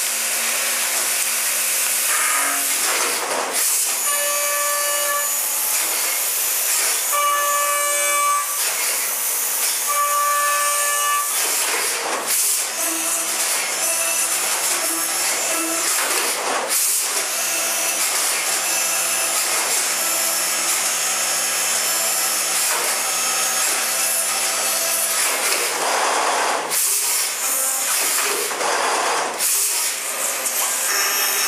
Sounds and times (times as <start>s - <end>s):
Drill: 0.0s - 31.4s.